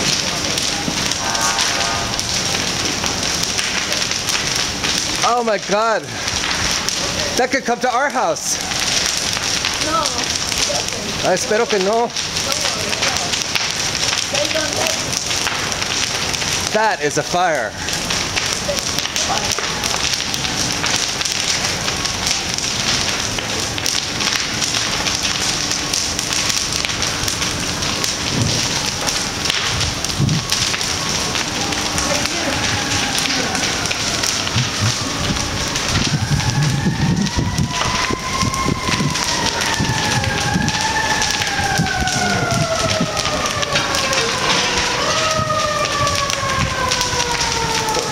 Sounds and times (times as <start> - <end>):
Fire: 0.0 - 48.1
Wind noise (microphone): 29.7 - 30.6, 34.5 - 43.3.